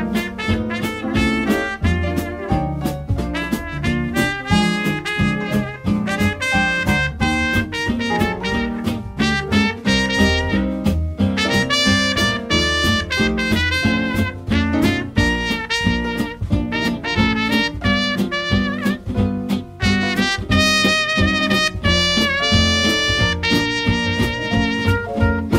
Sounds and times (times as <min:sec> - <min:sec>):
Music: 0:00.0 - 0:25.5.